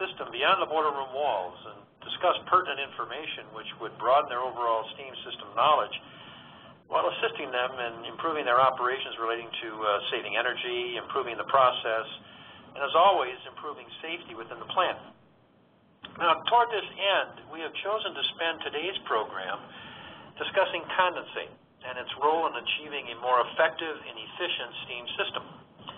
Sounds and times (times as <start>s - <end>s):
Speech: 0.0s - 6.0s, 6.9s - 12.2s, 12.8s - 15.1s, 16.1s - 19.7s, 20.4s - 25.5s.